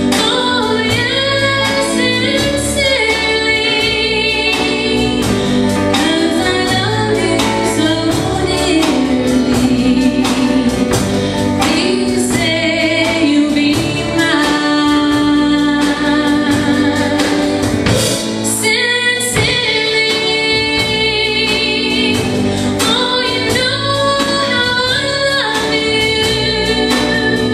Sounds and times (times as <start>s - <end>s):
Music: 0.0s - 27.5s.